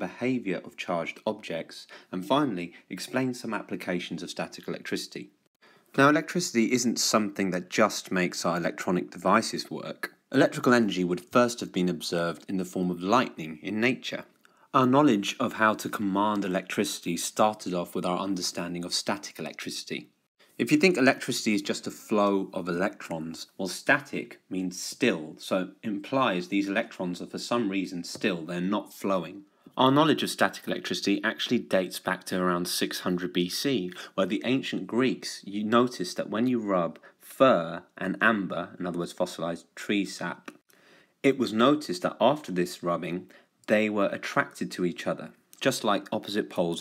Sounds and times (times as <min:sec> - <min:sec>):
Speech: 0:00.0 - 0:40.6, 0:41.2 - 0:46.8.